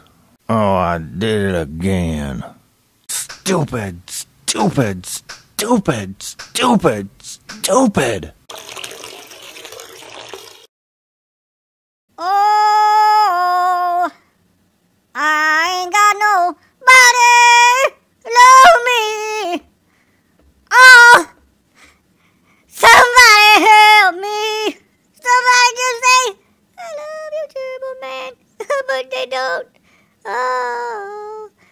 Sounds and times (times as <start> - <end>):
Water: 8.5 - 10.7
Water tap, faucet: 8.5 - 10.7.